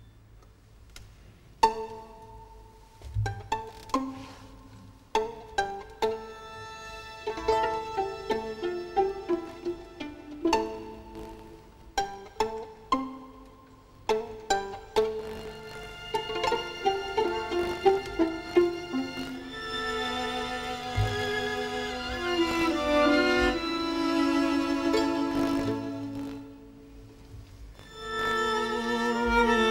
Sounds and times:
Violin, fiddle: 1.6 - 29.7.

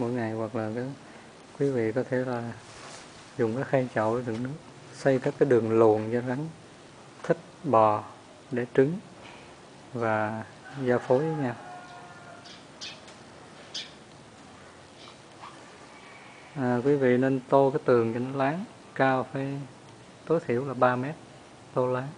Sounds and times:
Speech: 0.0 - 1.0, 1.6 - 2.6, 3.4 - 6.6, 7.2 - 9.1, 9.9 - 11.7, 16.6 - 21.2, 21.8 - 22.1.

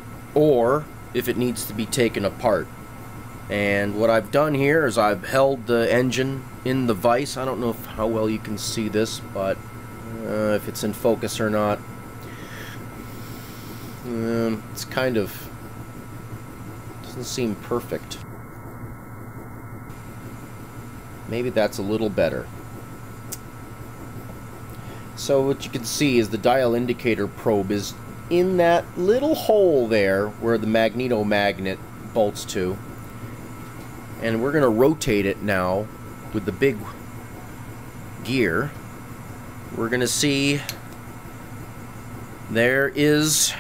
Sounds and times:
Speech: 0.4 - 2.7, 3.5 - 11.8, 14.0 - 15.5, 17.0 - 18.2, 21.3 - 22.5, 25.2 - 32.8, 34.2 - 37.0, 38.2 - 38.8, 39.7 - 40.8, 42.5 - 43.6.

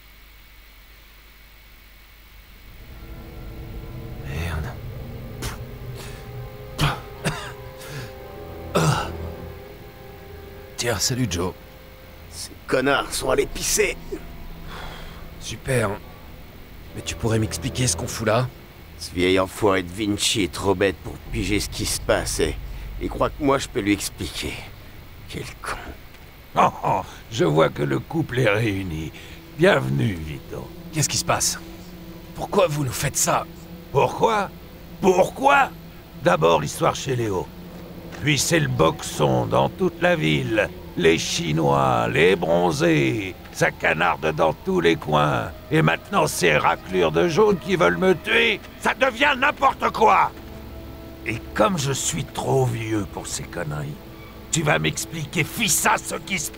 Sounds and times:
Music: 2.5 - 56.5
Speech: 4.2 - 4.8, 10.8 - 11.6, 12.3 - 14.2, 15.4 - 16.0, 16.9 - 24.7, 25.3 - 26.0, 26.6 - 31.6, 32.4 - 37.5, 38.2 - 50.4, 51.3 - 56.5.

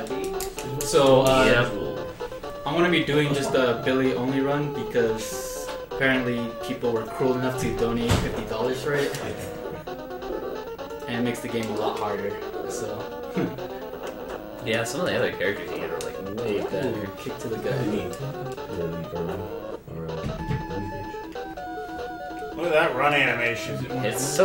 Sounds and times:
Music: 0.0 - 24.4
Speech: 2.7 - 9.5, 11.1 - 13.0, 14.6 - 21.0, 22.6 - 24.4.

